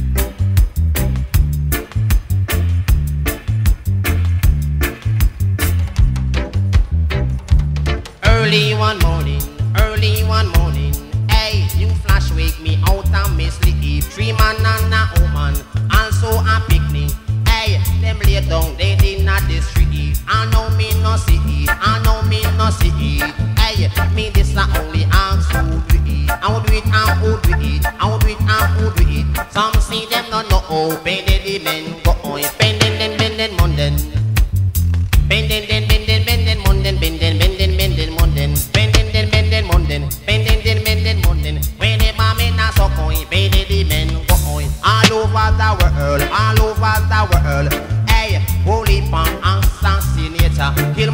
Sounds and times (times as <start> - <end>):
Music: 0.0 - 51.1.